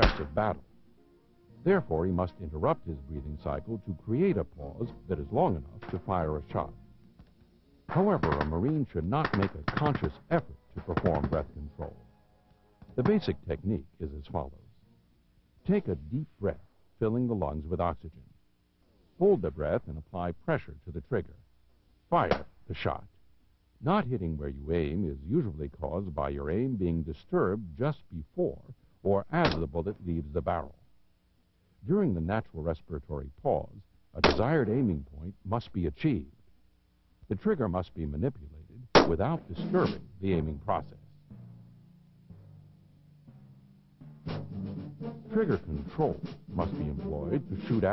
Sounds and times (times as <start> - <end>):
Speech: 0.0 - 0.7, 1.6 - 6.8, 7.9 - 12.0, 12.9 - 14.9, 15.6 - 18.4, 19.2 - 21.4, 22.1 - 23.2, 23.8 - 30.8, 31.8 - 36.4, 37.2 - 41.2, 45.3 - 47.9
Timpani: 41.3 - 47.9.